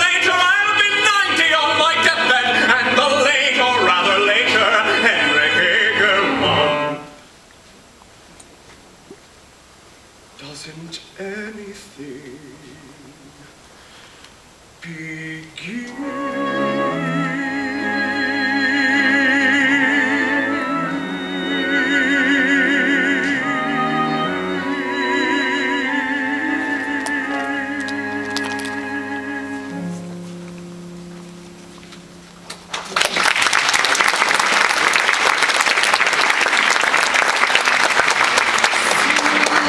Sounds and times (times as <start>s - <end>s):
Classical music: 0.0s - 7.2s, 15.9s - 35.1s
Cello: 15.9s - 32.3s.